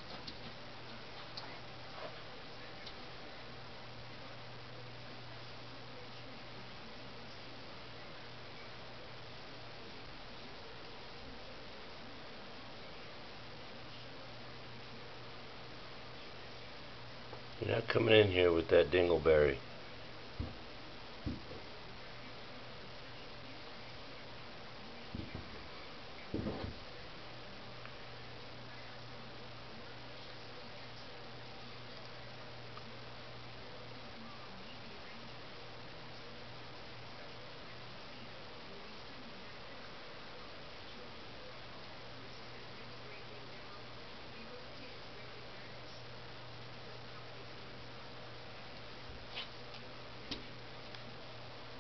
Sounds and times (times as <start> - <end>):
Speech: 0.8 - 20.0, 21.2 - 51.8.